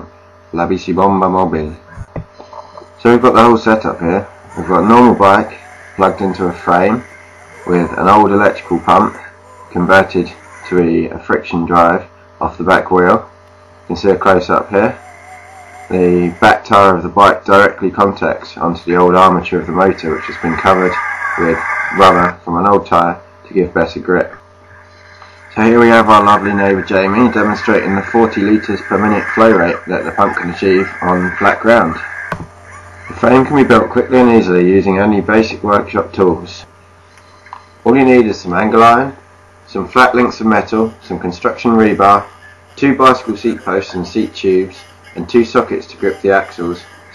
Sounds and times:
Speech: 0.0s - 13.3s, 13.9s - 15.0s, 15.9s - 24.4s, 25.5s - 32.1s, 33.1s - 36.7s, 37.8s - 47.1s.

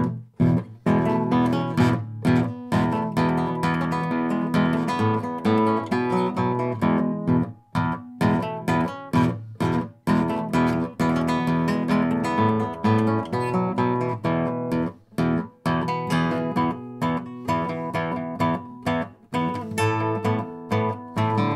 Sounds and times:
Acoustic guitar: 0.0s - 21.5s
Strum: 0.0s - 21.5s.

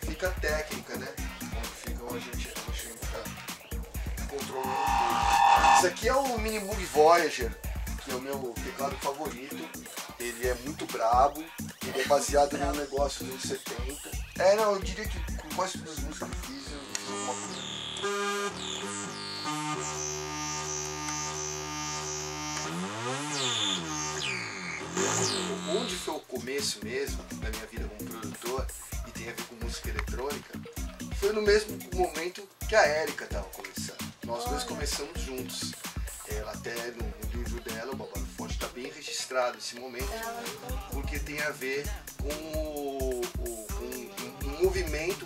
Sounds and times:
Speech: 0.0s - 3.4s, 4.2s - 5.1s, 5.8s - 17.5s, 25.4s - 45.2s
Music: 0.0s - 45.2s.

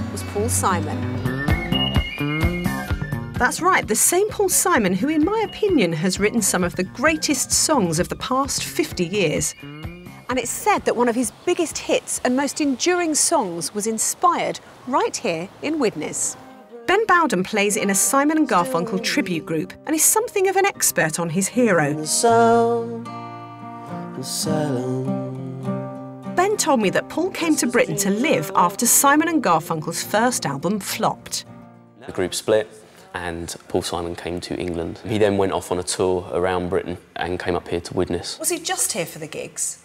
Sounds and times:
Music: 0.0s - 12.5s, 15.8s - 34.6s.

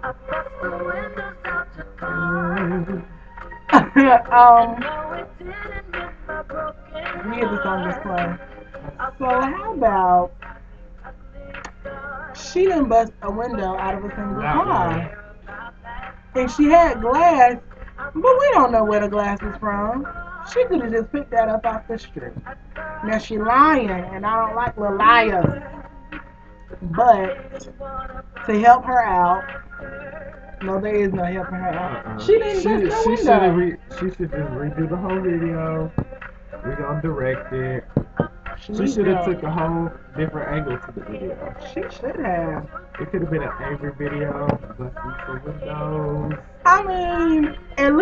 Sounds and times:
Music: 0.0s - 48.0s
Speech: 0.6s - 1.2s, 2.0s - 3.1s, 3.7s - 5.2s, 7.0s - 10.3s, 12.4s - 15.2s, 16.4s - 17.6s, 18.2s - 25.8s, 26.8s - 27.7s, 28.5s - 29.5s, 30.6s - 48.0s.

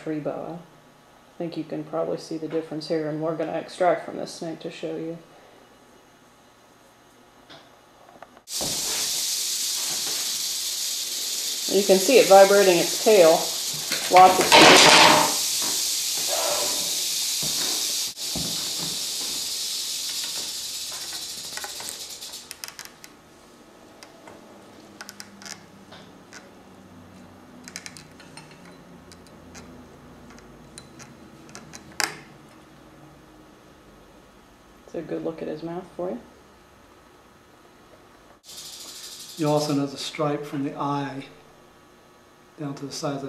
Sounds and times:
Hiss: 8.5s - 22.6s, 38.4s - 39.8s.

